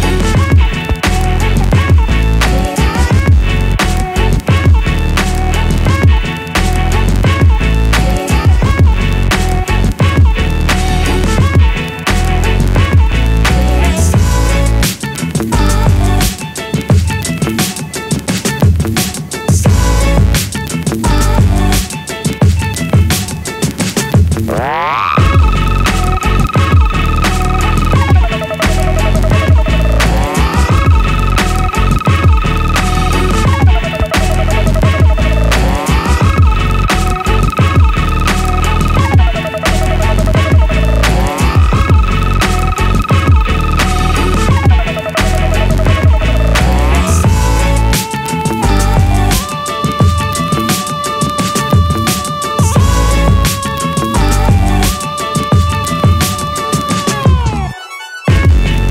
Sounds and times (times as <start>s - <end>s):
Music: 0.0s - 58.9s.